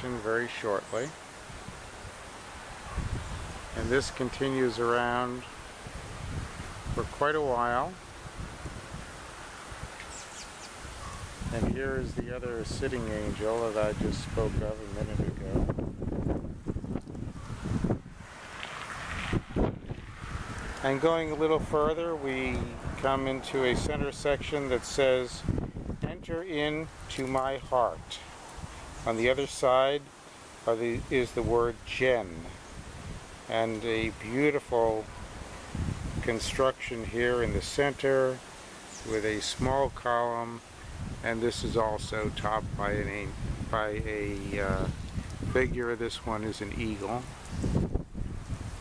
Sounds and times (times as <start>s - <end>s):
Speech: 0.0s - 1.2s, 3.8s - 5.5s, 7.0s - 8.0s, 11.5s - 15.7s, 20.8s - 28.3s, 29.0s - 32.6s, 33.5s - 35.1s, 36.2s - 38.4s, 39.0s - 40.6s, 41.2s - 47.3s
Outside, rural or natural: 0.0s - 48.8s
Wind: 0.0s - 48.8s.